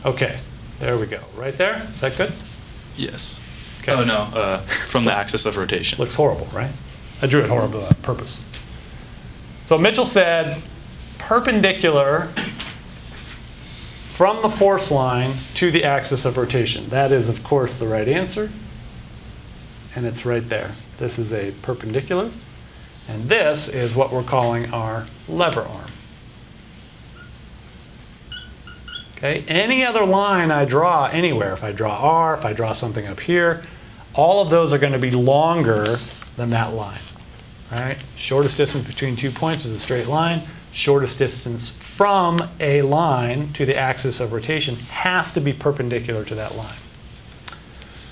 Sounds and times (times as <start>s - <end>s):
Speech: 0.0s - 8.5s, 9.7s - 12.6s, 14.1s - 18.6s, 19.9s - 22.5s, 23.1s - 26.0s, 29.2s - 33.6s, 34.2s - 46.9s
Inside, small room: 0.0s - 48.1s.